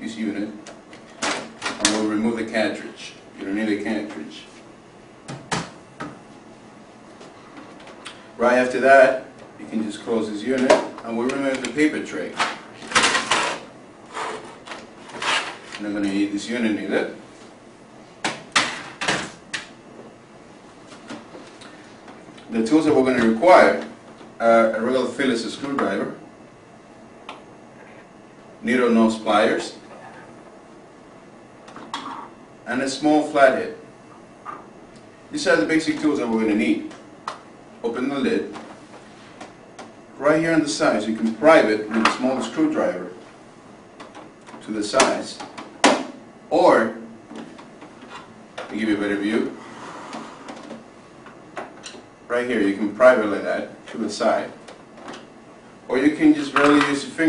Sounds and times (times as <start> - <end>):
Speech: 0.0 - 0.7, 1.8 - 4.6, 8.4 - 12.5, 15.8 - 17.2, 22.5 - 26.2, 28.6 - 29.9, 32.6 - 33.8, 35.3 - 37.0, 37.8 - 38.6, 40.2 - 43.2, 44.6 - 45.5, 46.5 - 47.1, 48.7 - 49.6, 52.3 - 54.6, 55.9 - 57.2.